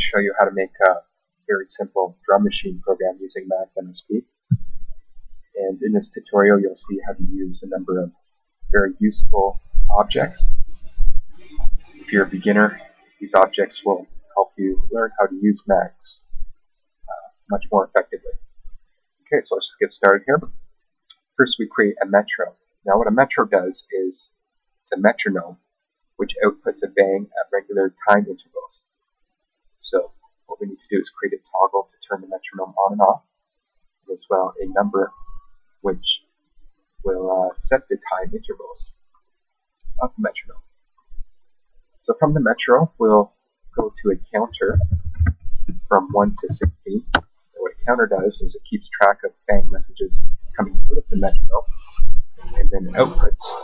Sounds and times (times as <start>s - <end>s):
Narration, monologue: 0.0s - 53.6s
Drum machine: 4.5s - 5.0s, 44.5s - 47.2s.